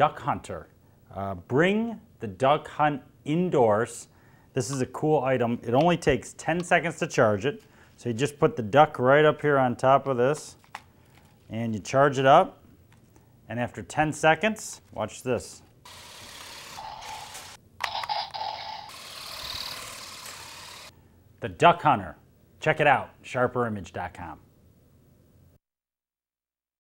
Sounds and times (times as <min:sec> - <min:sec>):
Speech: 0:00.0 - 0:10.6, 0:11.5 - 0:12.6, 0:13.5 - 0:15.7, 0:21.4 - 0:24.5.